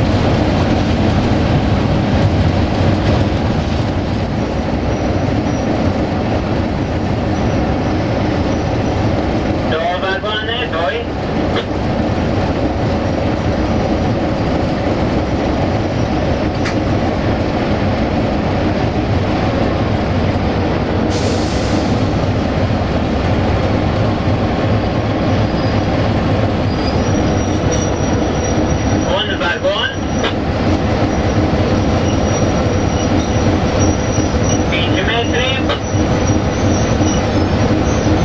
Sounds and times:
Railroad car, train wagon: 0.0 - 38.2
Train: 0.0 - 38.2
Speech: 9.7 - 11.1, 29.1 - 30.0, 34.7 - 35.8.

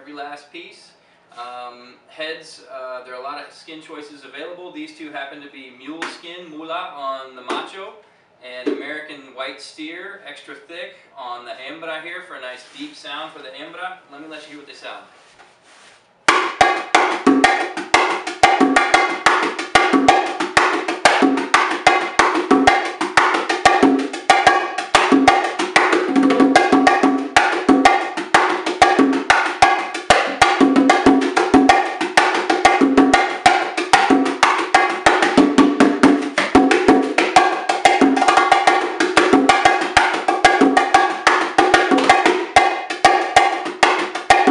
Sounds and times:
Speech: 0.0 - 15.1.

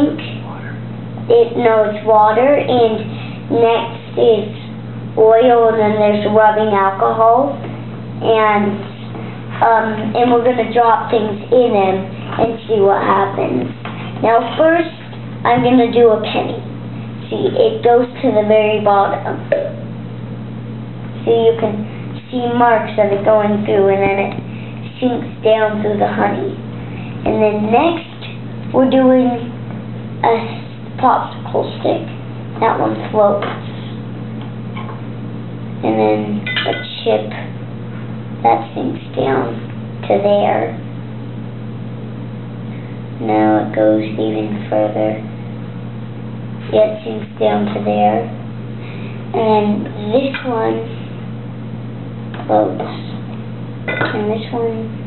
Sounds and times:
Speech: 0.0 - 9.0, 9.6 - 19.8, 21.2 - 26.6, 27.2 - 29.6, 30.2 - 34.0, 35.8 - 37.5, 38.4 - 40.9, 43.2 - 45.3, 46.6 - 48.4, 49.3 - 51.1, 52.4 - 53.2, 53.9 - 55.0.

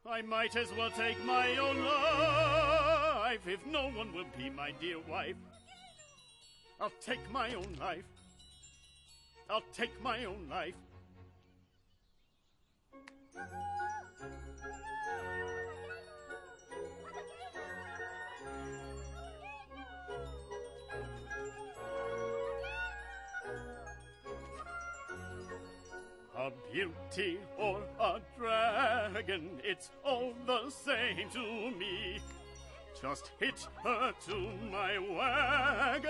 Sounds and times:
Music: 0.0 - 36.0
Speech: 3.3 - 5.4, 6.8 - 8.0, 9.5 - 10.8.

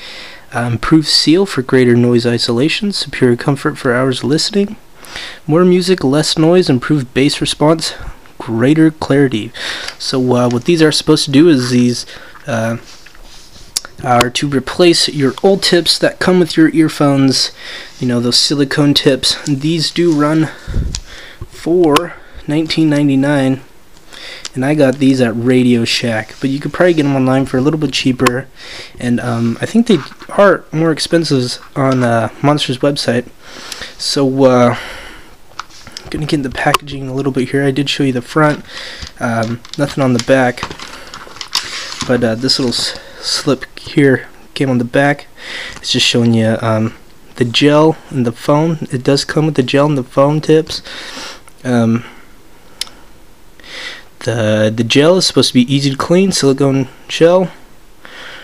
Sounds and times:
Speech: 0.5 - 4.8, 5.5 - 12.9, 13.8 - 20.6, 21.6 - 23.7, 24.5 - 33.3, 34.0 - 34.8, 36.1 - 40.7, 42.0 - 50.8, 51.6 - 52.1, 54.2 - 57.6.

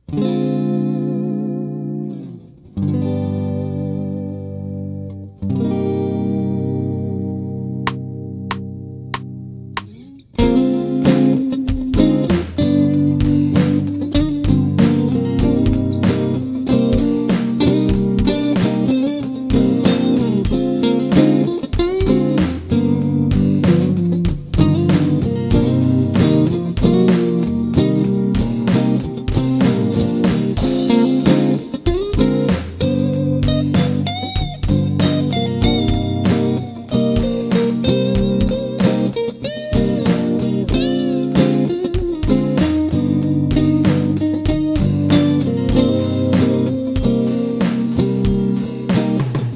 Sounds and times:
Bass guitar: 0.0 - 49.5
Electric guitar: 0.0 - 49.5
Drum kit: 7.8 - 49.5
Bass drum: 10.4 - 39.2, 39.8 - 49.5.

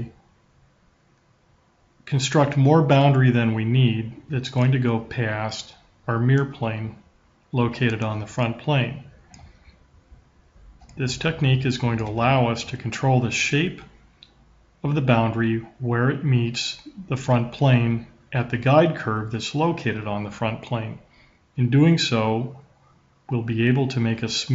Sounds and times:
Speech: 0.0 - 0.2, 2.1 - 9.2, 10.9 - 14.0, 14.8 - 22.7, 23.3 - 24.5.

